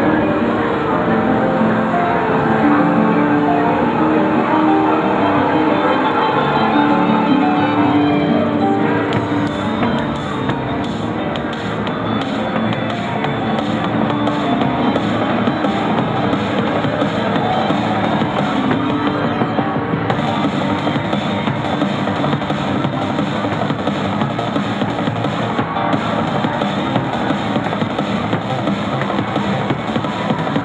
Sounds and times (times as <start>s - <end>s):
Music: 0.0s - 30.6s.